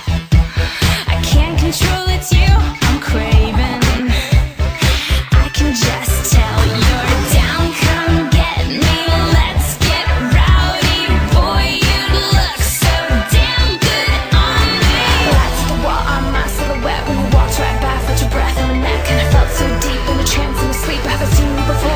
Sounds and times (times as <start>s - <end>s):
Disco: 0.0s - 21.9s
Exciting music: 0.0s - 21.9s
New-age music: 0.0s - 21.9s.